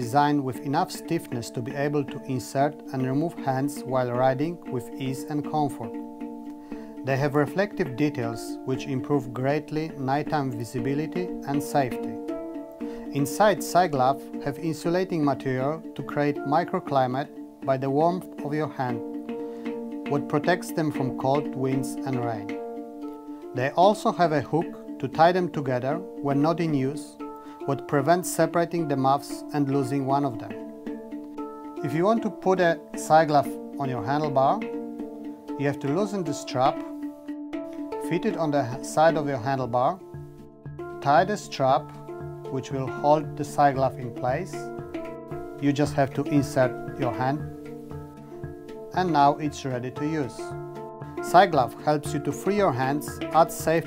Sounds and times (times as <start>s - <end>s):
Speech: 0.0s - 6.0s, 7.0s - 12.2s, 13.1s - 19.0s, 20.1s - 22.5s, 23.6s - 30.6s, 31.8s - 34.6s, 35.6s - 36.9s, 38.1s - 40.0s, 41.0s - 41.9s, 42.5s - 44.7s, 45.6s - 47.5s, 49.0s - 50.5s, 51.3s - 53.8s
Music: 0.0s - 53.8s.